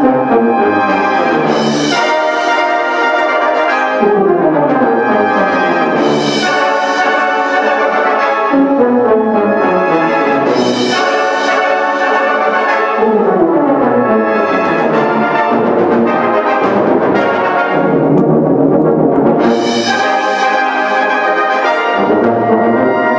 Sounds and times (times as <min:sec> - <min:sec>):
Brass instrument: 0:00.0 - 0:23.1.